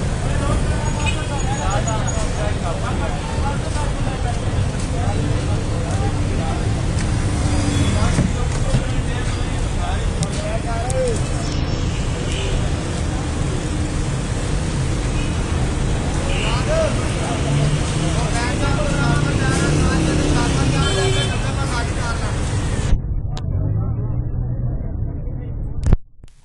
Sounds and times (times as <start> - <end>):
Speech: 0.0 - 13.6, 15.9 - 22.7
Outside, urban or manmade: 0.0 - 26.4.